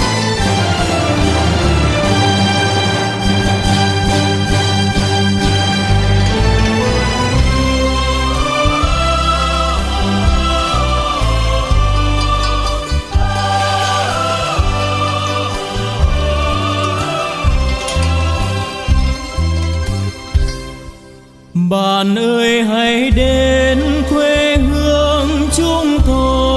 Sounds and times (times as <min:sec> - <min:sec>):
Music: 0:00.0 - 0:26.5.